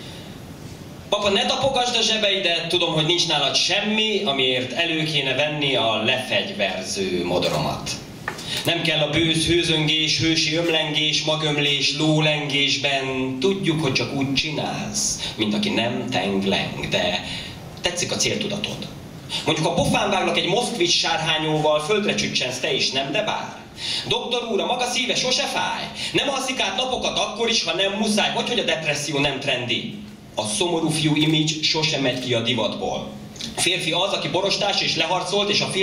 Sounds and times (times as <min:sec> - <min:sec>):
Speech: 0:01.1 - 0:08.1, 0:08.7 - 0:35.8.